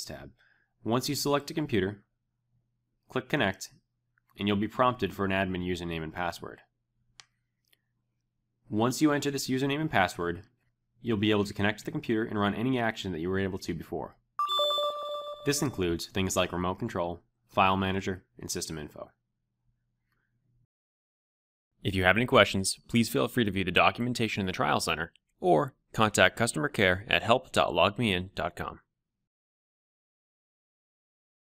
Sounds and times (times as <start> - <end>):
Speech: 0.0 - 2.1, 3.1 - 3.8, 4.4 - 6.7, 8.7 - 14.2, 15.4 - 19.2, 21.8 - 28.9.